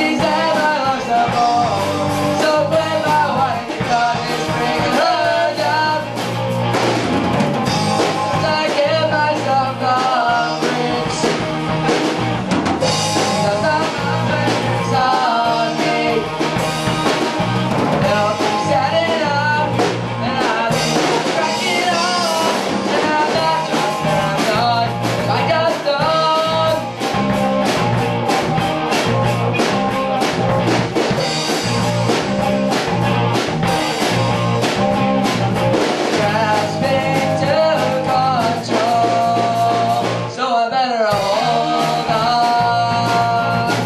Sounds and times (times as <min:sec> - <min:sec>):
Rock and roll: 0:00.0 - 0:43.8.